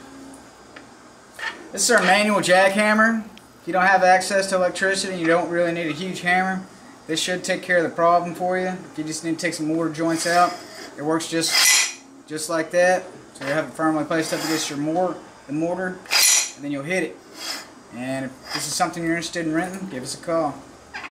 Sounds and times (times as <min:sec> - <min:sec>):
Speech: 0:01.8 - 0:11.6, 0:12.3 - 0:16.0, 0:16.6 - 0:17.2, 0:17.9 - 0:20.7
Tools: 0:11.5 - 0:12.0, 0:16.1 - 0:16.6.